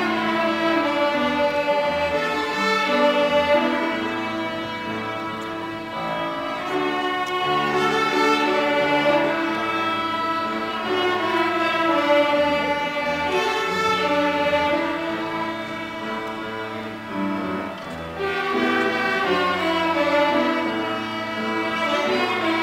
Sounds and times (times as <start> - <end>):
Violin, fiddle: 0.0 - 22.6.